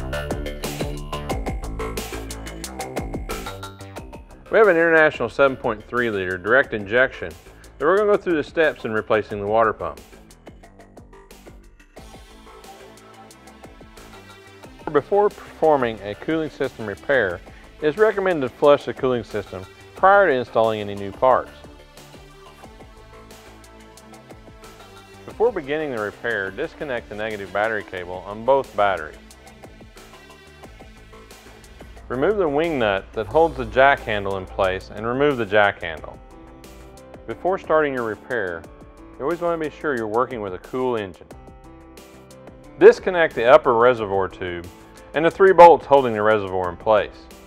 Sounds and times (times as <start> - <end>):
Music: 0.0 - 47.4
Speech: 4.5 - 10.0, 14.9 - 21.6, 25.3 - 29.2, 32.1 - 36.2, 37.3 - 38.6, 39.2 - 41.3, 42.8 - 47.3.